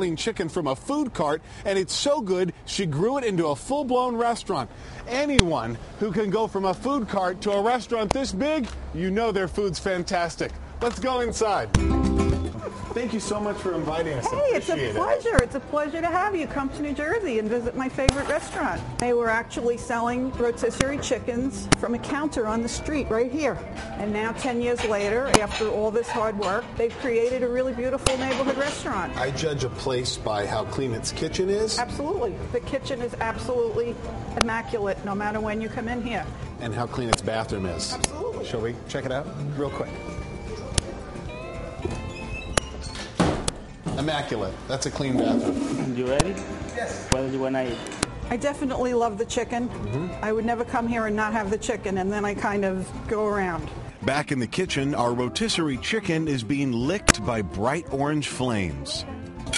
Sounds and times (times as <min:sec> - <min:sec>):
Music: 0:11.4 - 0:59.5.